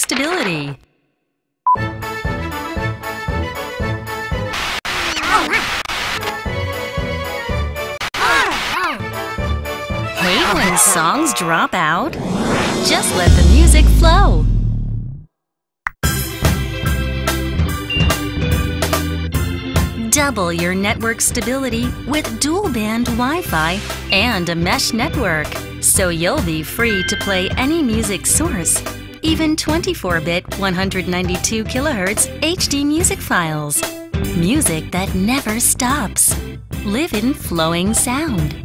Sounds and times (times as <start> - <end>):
Speech: 0.0 - 0.8, 10.2 - 12.2, 12.9 - 14.5, 20.0 - 38.6
Music: 1.7 - 4.6, 6.2 - 11.7, 16.0 - 38.6.